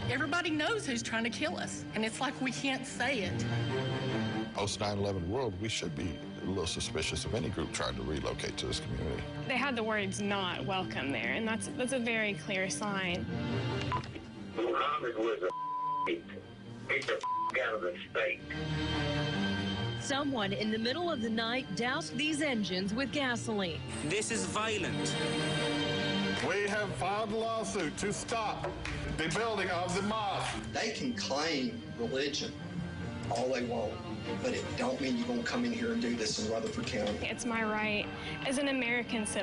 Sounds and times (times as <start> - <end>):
Music: 0.0 - 39.4.